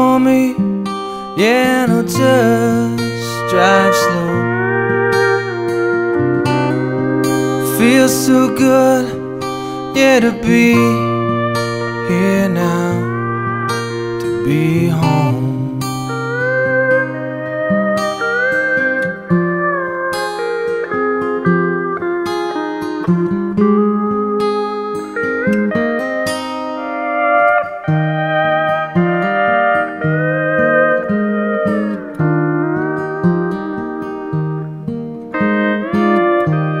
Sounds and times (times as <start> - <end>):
Steel guitar, slide guitar: 0.0 - 36.8.